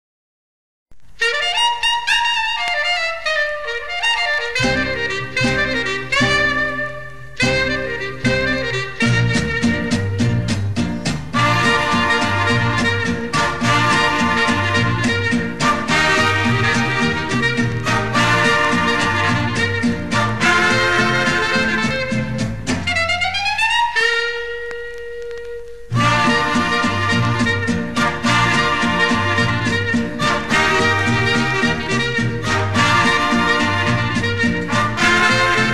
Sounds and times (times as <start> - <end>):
Clarinet: 1.1 - 35.7.